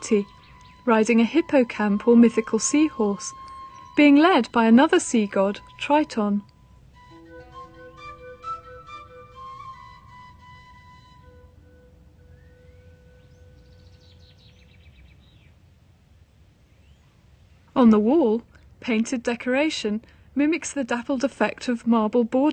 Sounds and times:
Speech: 0:00.0 - 0:00.3, 0:00.9 - 0:03.4, 0:04.0 - 0:06.5, 0:17.8 - 0:22.5
Music: 0:00.0 - 0:14.3.

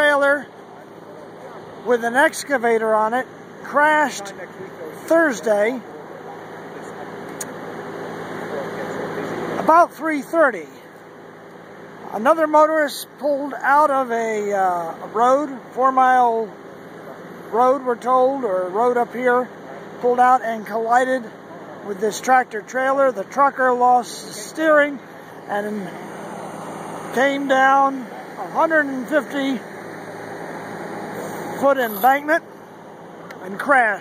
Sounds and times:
Speech: 0:00.0 - 0:07.5, 0:08.4 - 0:10.9, 0:12.0 - 0:26.0, 0:27.1 - 0:29.7, 0:31.5 - 0:32.5, 0:33.3 - 0:34.0
Vehicle: 0:00.0 - 0:34.0.

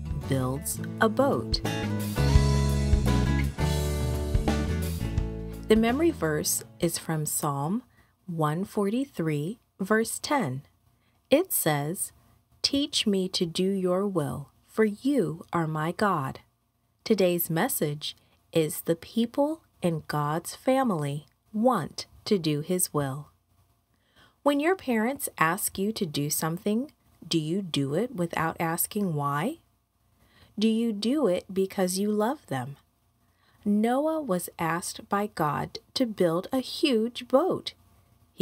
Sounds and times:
Speech: 0:00.0 - 0:01.6, 0:05.7 - 0:10.7, 0:11.3 - 0:16.5, 0:17.1 - 0:23.4, 0:24.5 - 0:29.6, 0:30.6 - 0:32.8, 0:33.6 - 0:37.8.

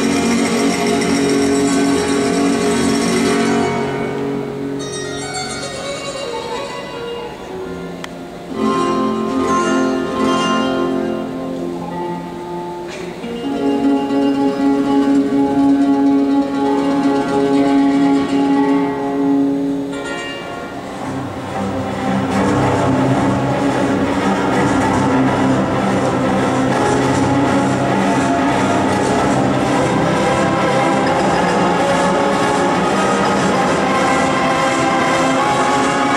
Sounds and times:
Flamenco: 0:00.0 - 0:36.1.

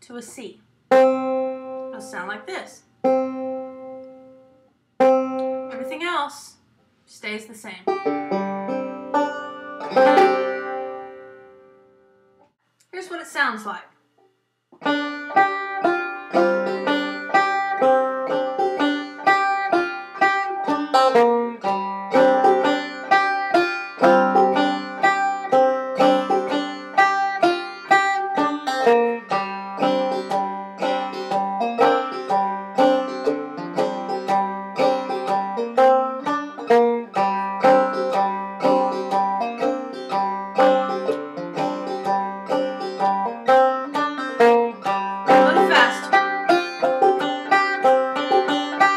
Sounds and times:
Speech: 0:00.0 - 0:00.6, 0:01.9 - 0:02.8, 0:05.7 - 0:07.9, 0:12.9 - 0:13.9, 0:45.4 - 0:46.2
Music: 0:00.9 - 0:02.0, 0:03.0 - 0:05.9, 0:07.9 - 0:12.6, 0:14.8 - 0:48.9.

